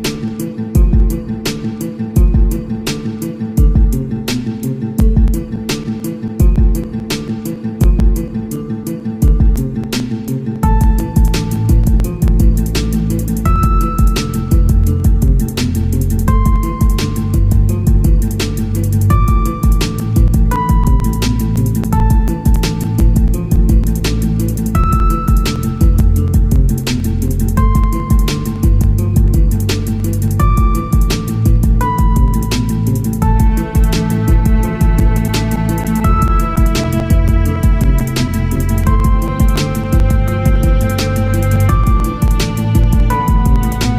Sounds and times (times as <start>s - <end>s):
Music: 0.0s - 43.9s.